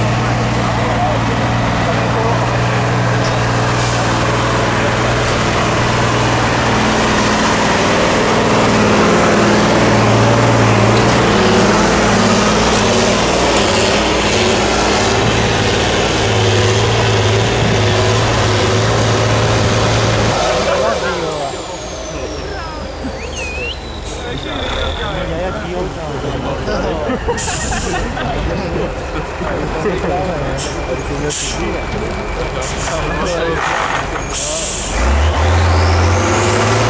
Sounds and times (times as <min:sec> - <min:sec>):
Speech: 0:00.0 - 0:03.4, 0:20.3 - 0:23.2, 0:24.1 - 0:35.0
Truck: 0:00.0 - 0:36.8.